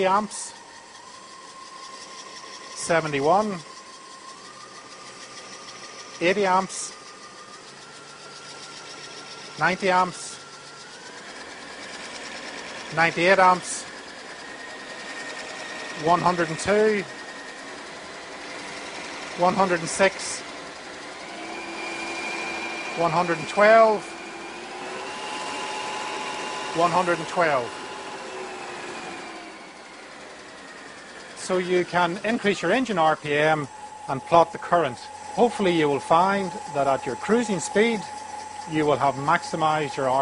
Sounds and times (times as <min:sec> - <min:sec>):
Speech: 0:00.0 - 0:00.6, 0:02.8 - 0:03.7, 0:06.2 - 0:07.0, 0:09.6 - 0:10.4, 0:12.9 - 0:13.9, 0:16.0 - 0:17.1, 0:19.4 - 0:20.4, 0:23.0 - 0:24.1, 0:26.8 - 0:27.7, 0:31.4 - 0:38.1, 0:38.7 - 0:40.2.